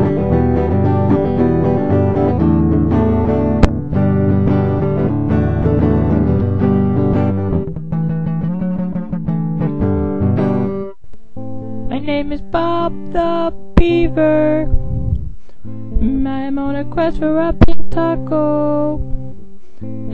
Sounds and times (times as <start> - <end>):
Inside, small room: 0.0 - 20.1
Music: 0.0 - 20.1.